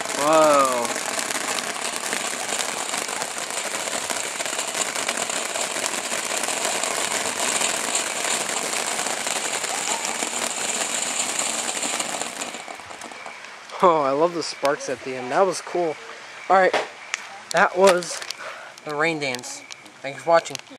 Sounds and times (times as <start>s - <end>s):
Speech: 18.9s - 20.7s.